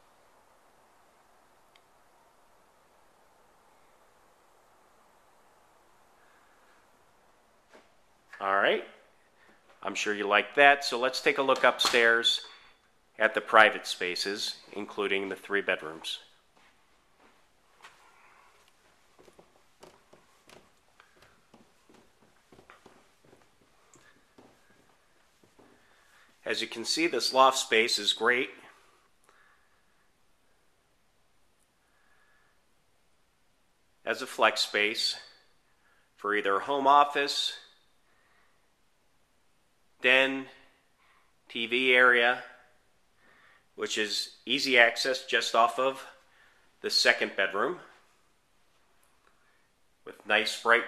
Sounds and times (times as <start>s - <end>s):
Speech: 8.4s - 9.1s, 9.8s - 12.5s, 13.2s - 16.3s, 26.4s - 28.8s, 34.0s - 35.4s, 36.2s - 37.7s, 40.0s - 40.7s, 41.5s - 42.7s, 43.8s - 46.2s, 46.8s - 48.0s, 50.0s - 50.8s.